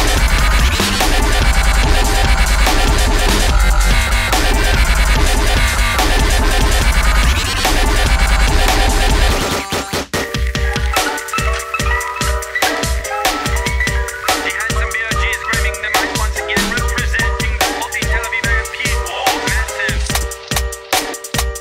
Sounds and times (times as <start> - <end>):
Drum and bass: 0.0 - 21.6.